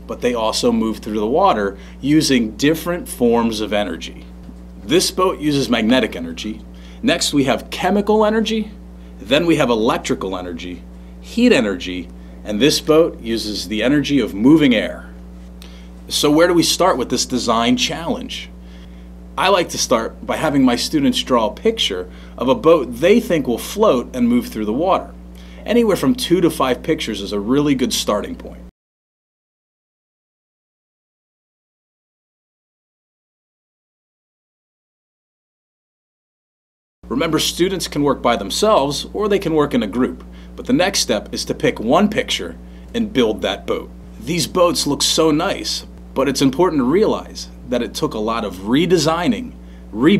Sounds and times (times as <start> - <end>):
Speech: 0.0 - 15.2, 16.1 - 18.6, 19.4 - 28.7, 37.1 - 50.2.